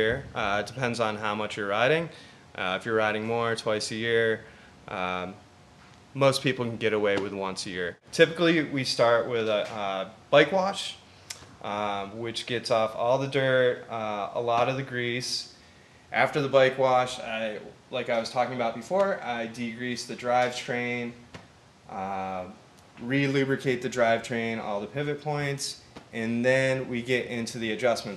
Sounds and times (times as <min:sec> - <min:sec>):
Speech: 0:00.0 - 0:05.4, 0:06.2 - 0:11.0, 0:11.6 - 0:15.5, 0:16.1 - 0:21.2, 0:21.9 - 0:28.1.